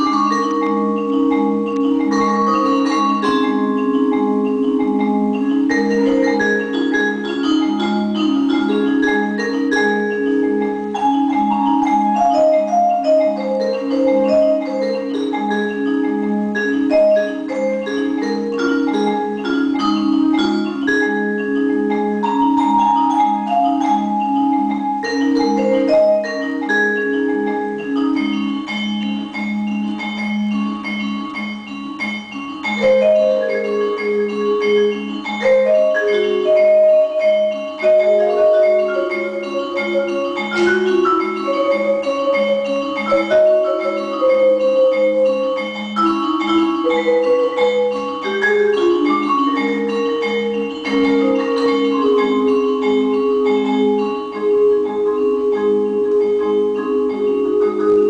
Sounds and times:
Music: 0:00.0 - 0:58.0.

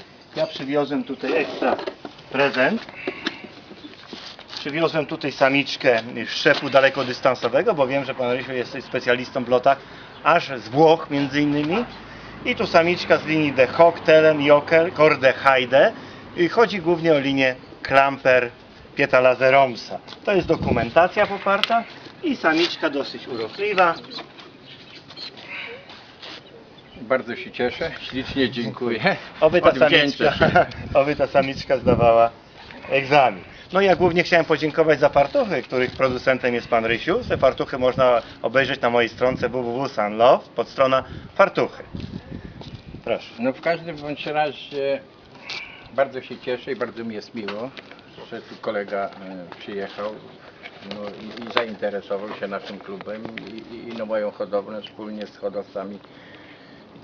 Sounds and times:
Outside, urban or manmade: 0:00.0 - 0:57.0
Speech: 0:00.4 - 0:02.8, 0:04.6 - 0:11.9, 0:12.5 - 0:24.3, 0:27.0 - 0:41.8, 0:46.0 - 0:56.0.

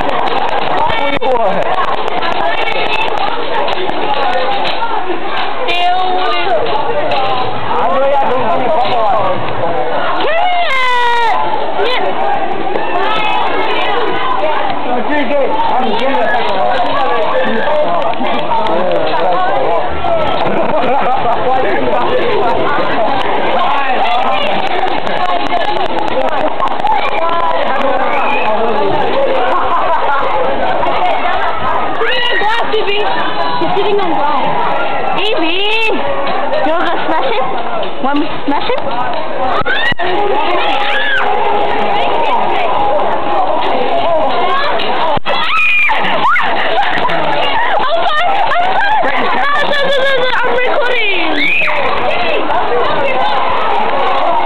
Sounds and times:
Children playing: 0:00.0 - 0:54.4
Outside, urban or manmade: 0:00.0 - 0:54.4.

